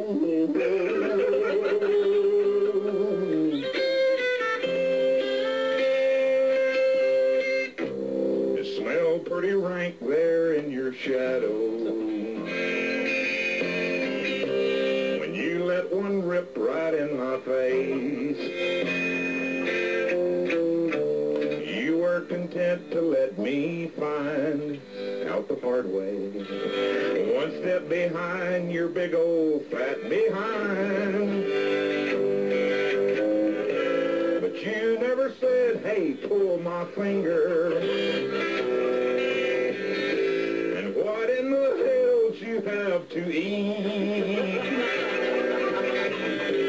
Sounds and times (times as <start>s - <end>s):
Music: 0.0s - 46.6s.